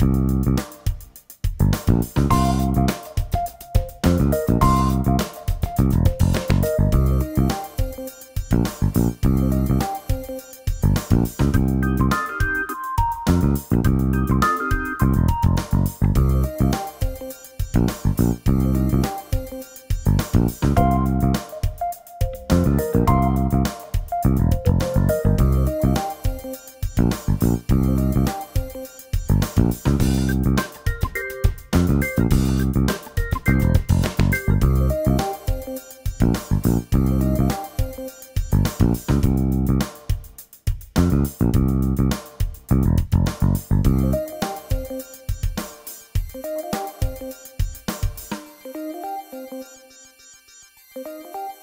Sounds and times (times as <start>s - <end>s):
Music: 0.0s - 51.6s.